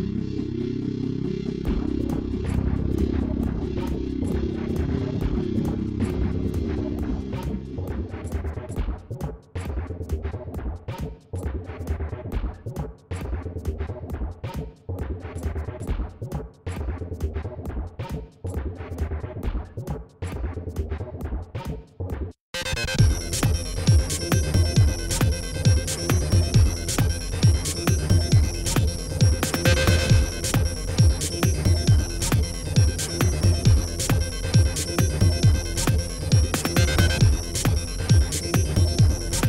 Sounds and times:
Music: 0.0 - 39.4.

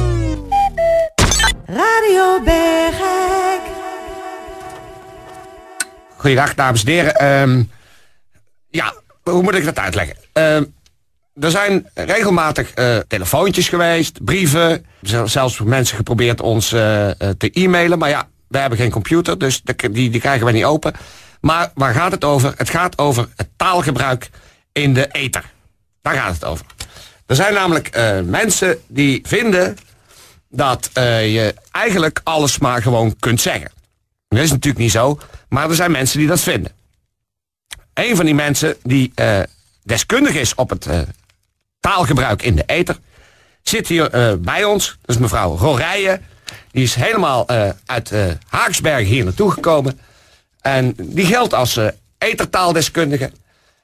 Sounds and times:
Speech: 6.2 - 7.7, 8.7 - 10.7, 11.4 - 26.7, 27.3 - 29.8, 30.5 - 36.8, 37.8 - 41.2, 41.8 - 43.0, 43.6 - 50.0, 50.6 - 53.4.

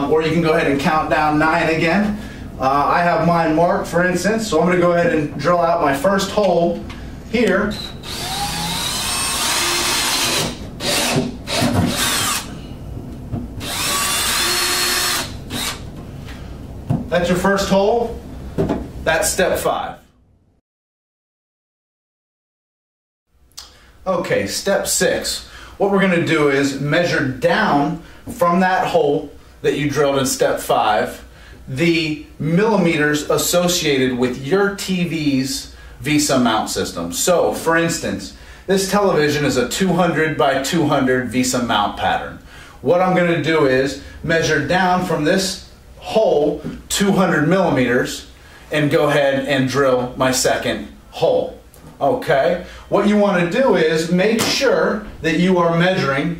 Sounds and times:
Speech: 0.0 - 7.8, 17.1 - 18.2, 19.0 - 20.1, 24.0 - 56.4
Inside, small room: 0.0 - 20.6
Drill: 7.8 - 12.5, 13.6 - 15.8.

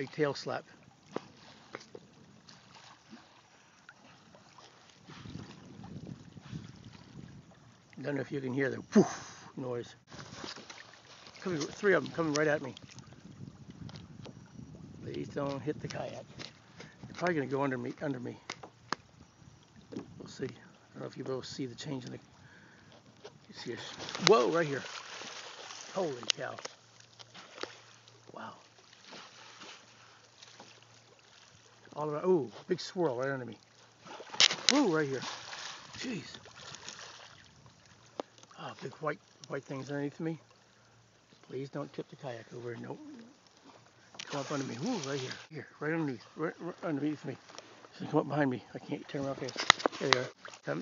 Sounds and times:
Speech: 0.0 - 0.6, 8.0 - 8.8, 9.6 - 10.0, 11.4 - 12.8, 15.0 - 16.2, 17.2 - 18.4, 20.3 - 22.2, 23.5 - 24.9, 25.9 - 26.6, 32.0 - 33.6, 34.7 - 35.3, 38.6 - 40.4, 41.5 - 43.2, 44.3 - 47.4, 48.0 - 50.8
Rowboat, canoe, kayak: 0.0 - 50.8.

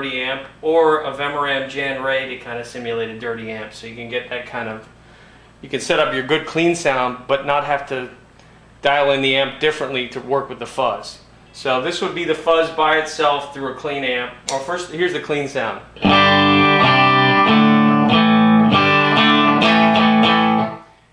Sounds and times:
Speech: 0.0 - 4.9, 5.6 - 8.2, 8.8 - 16.0
Music: 16.0 - 21.0.

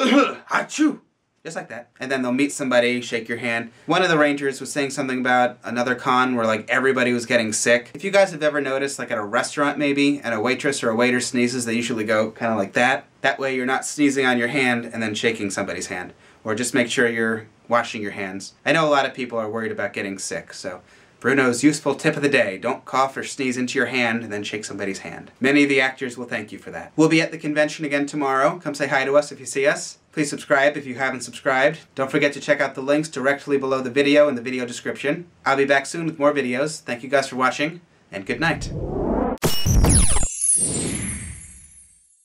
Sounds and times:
Speech: 0.0 - 38.7
Inside, small room: 0.0 - 42.2.

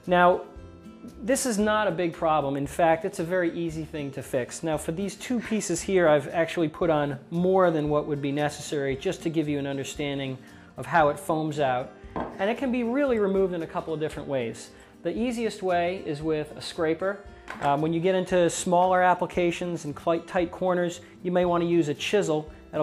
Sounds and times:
Music: 0.0 - 22.8
Speech: 0.1 - 0.4, 1.2 - 22.8.

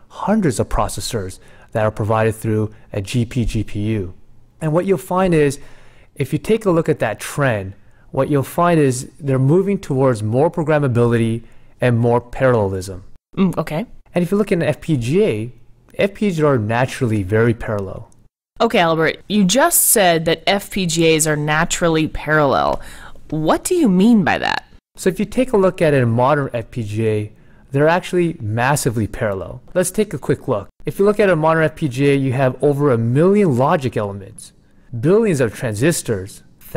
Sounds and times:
Speech: 0.1 - 5.6, 6.2 - 36.7.

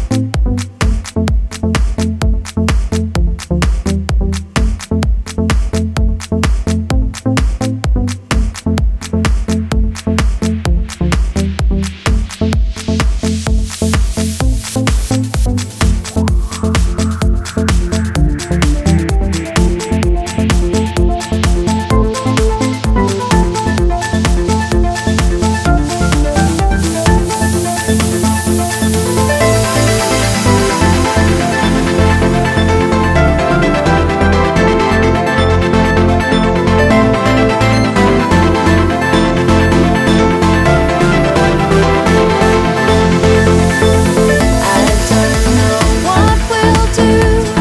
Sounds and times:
Music: 0.0 - 47.6.

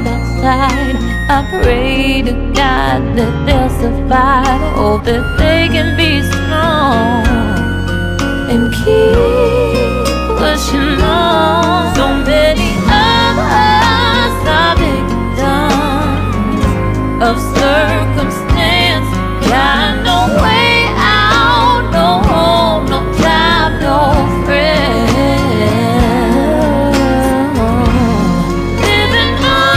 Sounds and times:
Music: 0.0 - 29.7.

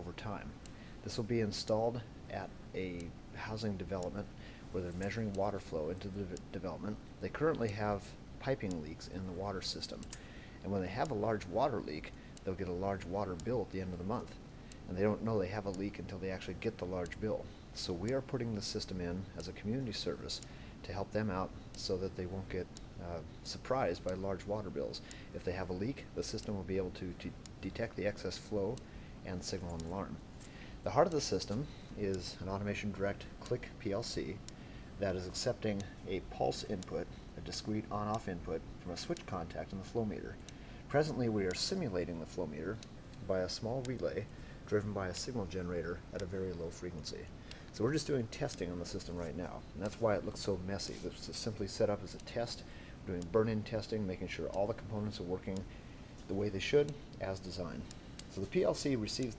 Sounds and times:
Speech: 0.0 - 30.2, 30.8 - 34.4, 35.0 - 55.7, 56.3 - 59.3.

